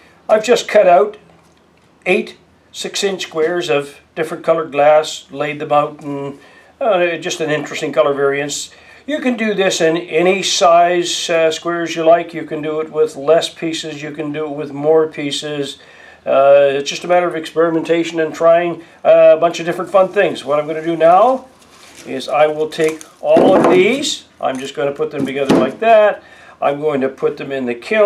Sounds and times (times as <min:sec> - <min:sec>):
Speech: 0:00.3 - 0:01.2, 0:02.0 - 0:28.0.